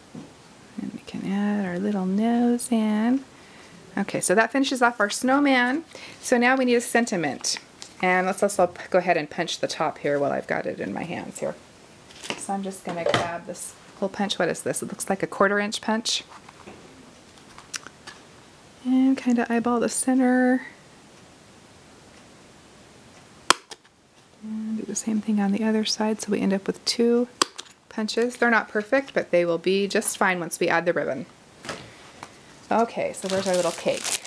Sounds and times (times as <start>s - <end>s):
Inside, small room: 0.0s - 34.2s
Speech: 0.8s - 3.3s, 4.0s - 11.6s, 12.4s - 16.3s, 18.8s - 20.8s, 24.4s - 31.3s, 32.7s - 34.2s.